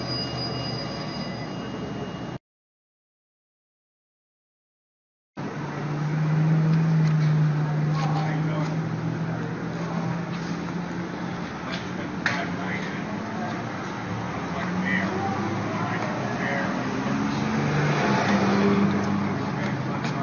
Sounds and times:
Outside, urban or manmade: 0.0 - 2.4, 5.4 - 20.2
Vehicle: 0.0 - 2.4, 5.4 - 20.2
Speech: 7.6 - 8.8, 11.6 - 13.8, 14.5 - 17.5, 19.0 - 20.2.

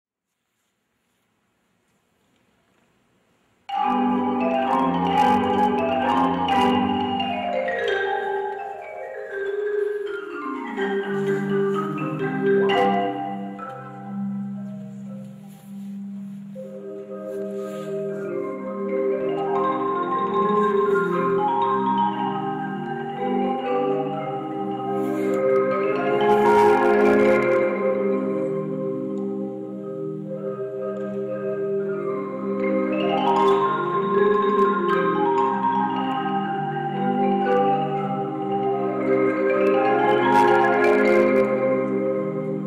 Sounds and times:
Glockenspiel: 3.7 - 42.6
Marimba, xylophone: 3.7 - 42.6.

